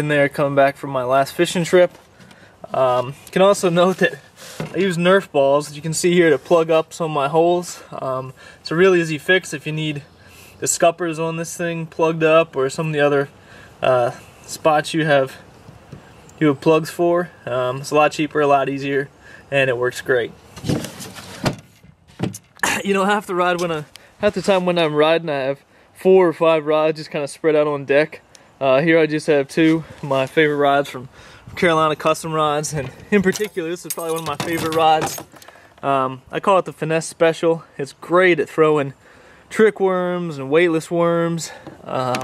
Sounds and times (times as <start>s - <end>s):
Speech: 0.0s - 1.9s, 2.7s - 15.4s, 16.4s - 20.4s, 22.7s - 35.2s, 35.8s - 42.2s.